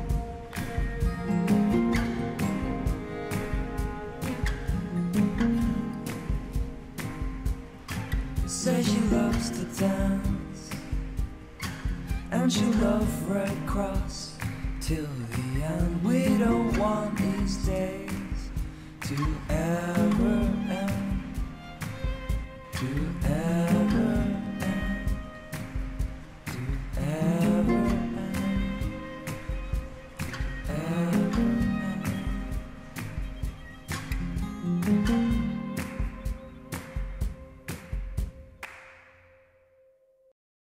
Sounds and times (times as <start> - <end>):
Music: 0.0 - 40.3.